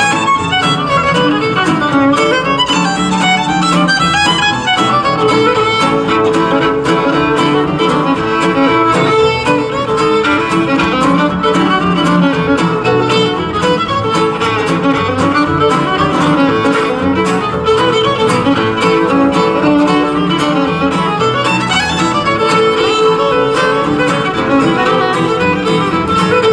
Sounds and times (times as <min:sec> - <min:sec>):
Violin, fiddle: 0:00.0 - 0:26.5.